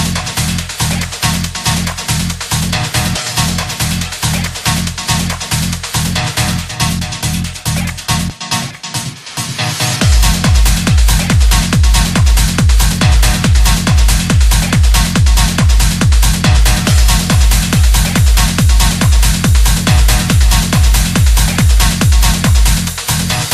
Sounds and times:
Trance music: 0.0s - 23.5s.

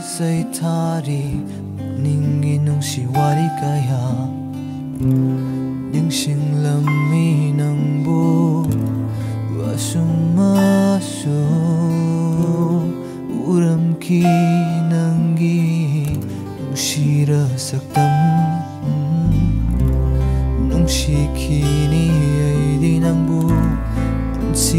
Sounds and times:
Independent music: 0.0s - 24.7s.

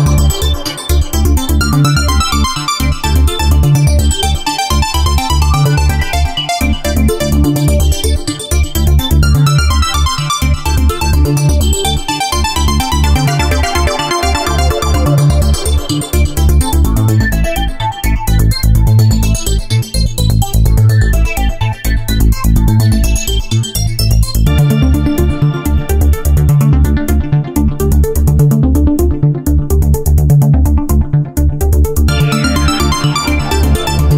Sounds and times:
Electronica: 0.0s - 34.1s.

